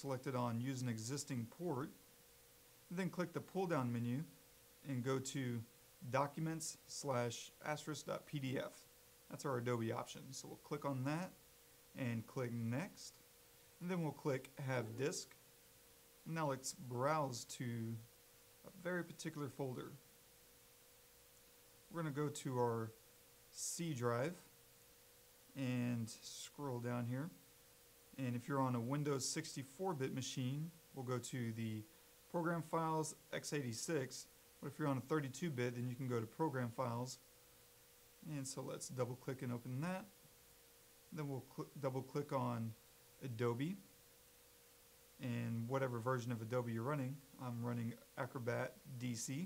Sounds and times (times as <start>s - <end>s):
Speech: 0.0s - 2.0s, 2.9s - 11.4s, 12.0s - 13.2s, 13.8s - 15.4s, 16.2s - 20.0s, 21.9s - 24.5s, 25.5s - 27.4s, 28.2s - 37.2s, 38.2s - 40.2s, 41.1s - 43.9s, 45.2s - 49.4s.